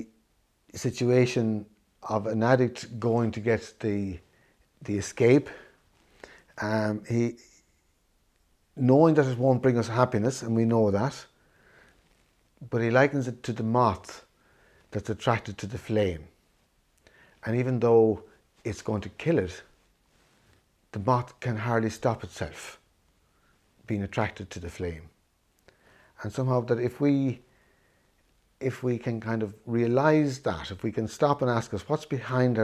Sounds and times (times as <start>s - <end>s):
Speech: 0.0s - 4.2s, 4.8s - 5.7s, 6.6s - 7.5s, 8.8s - 11.4s, 12.6s - 14.3s, 14.9s - 16.4s, 17.4s - 19.7s, 20.9s - 22.9s, 23.9s - 25.2s, 26.2s - 27.4s, 28.6s - 32.6s.